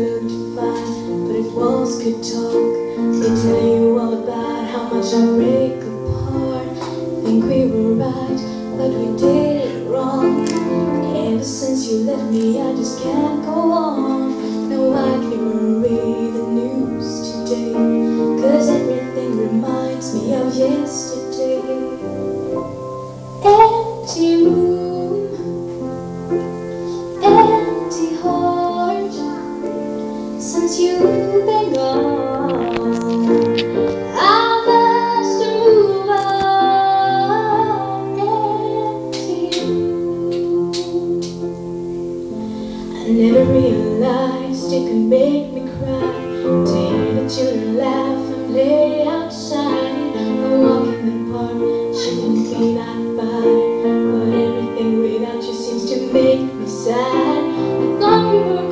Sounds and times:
Female singing: 0.0 - 22.4, 23.4 - 25.7, 27.1 - 29.4, 30.4 - 33.3, 34.1 - 41.4, 42.9 - 58.7
Music: 0.0 - 58.7.

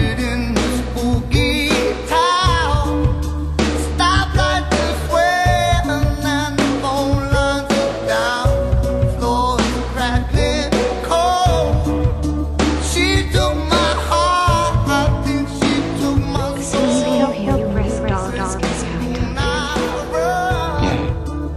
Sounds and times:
Independent music: 0.0 - 21.5.

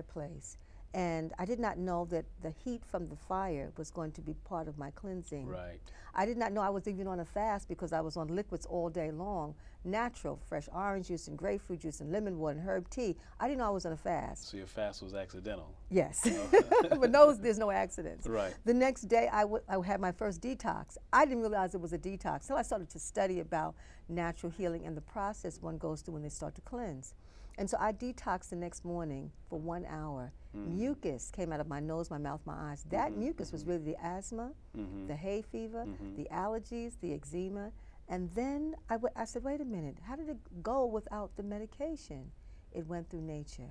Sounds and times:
Speech: 0.0 - 43.7.

